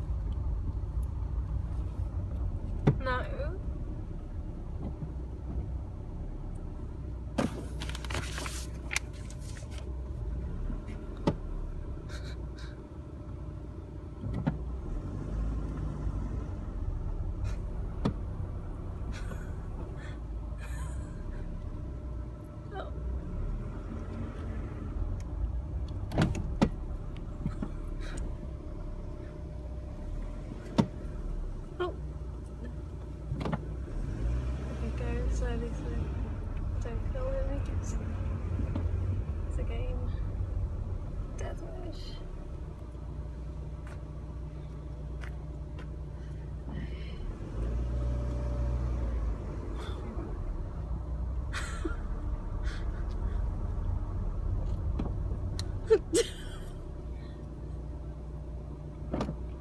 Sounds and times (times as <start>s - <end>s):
Speech: 3.0s - 3.6s, 34.8s - 36.2s, 36.8s - 38.0s, 41.4s - 42.3s.